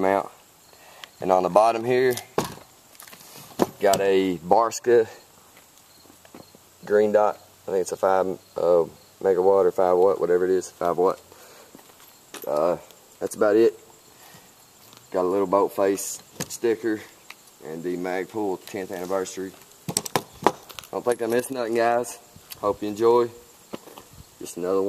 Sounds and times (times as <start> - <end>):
Speech: 0.0 - 0.4, 1.2 - 2.3, 3.8 - 5.3, 6.8 - 11.2, 12.4 - 13.8, 15.1 - 19.6, 20.9 - 23.4, 24.4 - 24.8.